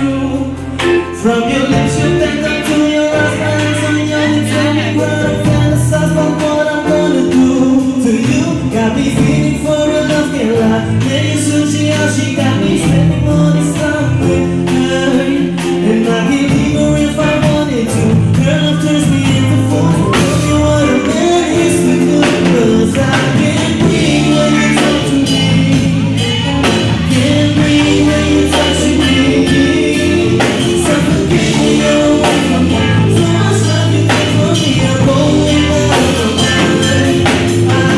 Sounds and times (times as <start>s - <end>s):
Male singing: 0.0s - 37.9s
Music: 0.0s - 37.9s.